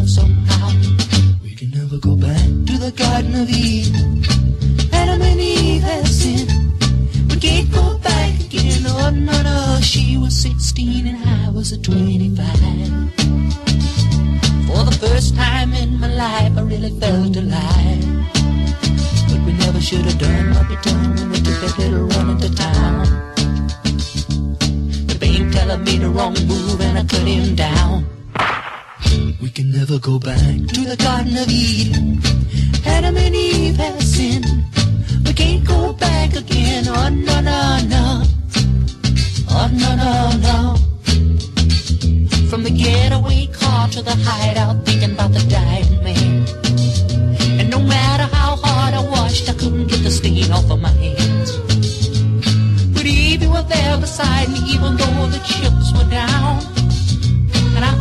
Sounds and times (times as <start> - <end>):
Music: 0.0 - 58.0.